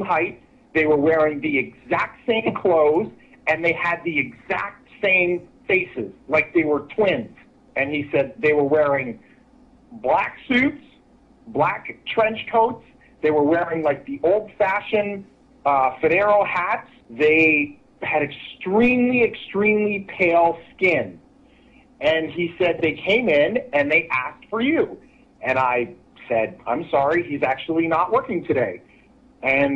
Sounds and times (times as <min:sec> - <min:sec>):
Speech: 0:00.0 - 0:09.2, 0:10.0 - 0:21.2, 0:22.0 - 0:28.8, 0:29.4 - 0:29.7.